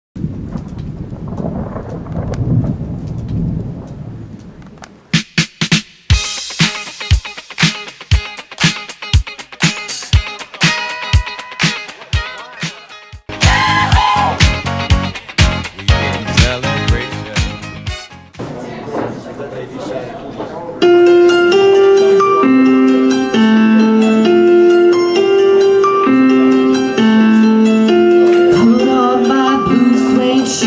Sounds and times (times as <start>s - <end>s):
Thunder: 0.2s - 5.0s
Rain: 0.2s - 5.1s.